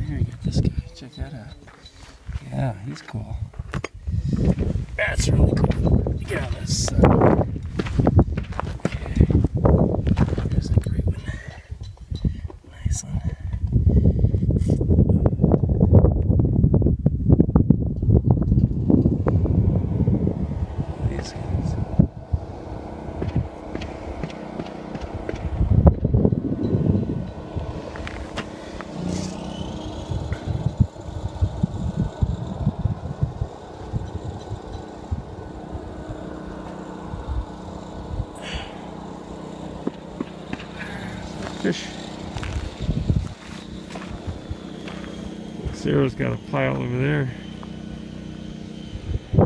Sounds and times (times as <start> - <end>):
Speech: 0.0 - 1.7, 2.4 - 3.5, 5.0 - 7.1, 12.8 - 13.4, 41.6 - 41.9, 45.6 - 47.4
Outside, rural or natural: 0.0 - 49.4.